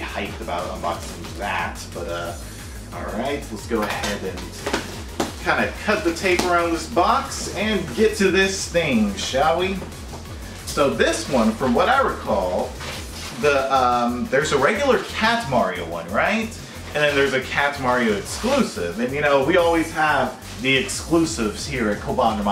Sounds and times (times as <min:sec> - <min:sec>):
Speech: 0:00.0 - 0:04.8, 0:05.4 - 0:09.8, 0:10.7 - 0:12.8, 0:13.4 - 0:22.5
Music: 0:00.0 - 0:22.5.